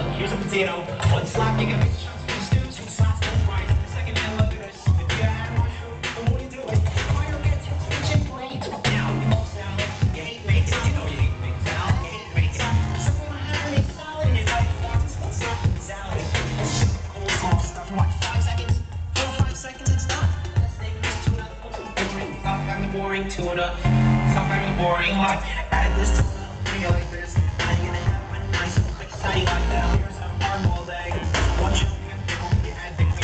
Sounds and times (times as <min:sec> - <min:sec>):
Music: 0:00.0 - 0:33.2.